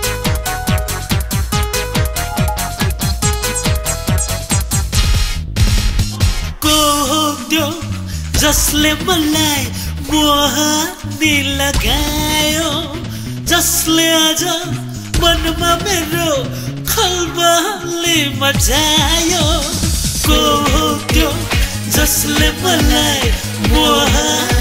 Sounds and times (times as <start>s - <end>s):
Music of Asia: 0.0s - 24.6s
Guitar: 6.5s - 24.6s
Singing: 6.6s - 24.6s.